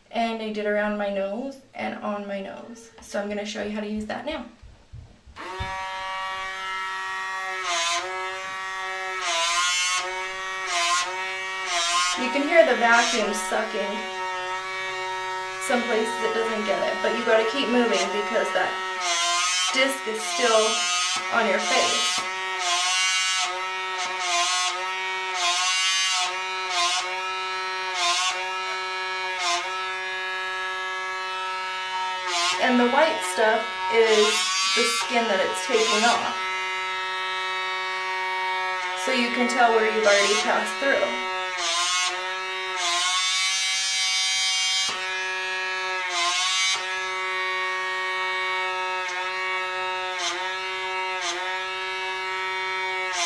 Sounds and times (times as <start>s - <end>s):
Inside, small room: 0.0s - 53.2s
Speech: 0.1s - 4.6s, 12.2s - 14.0s, 15.6s - 18.8s, 19.7s - 22.2s, 32.6s - 36.4s, 39.0s - 41.2s
Electric shaver, electric razor: 5.4s - 53.2s.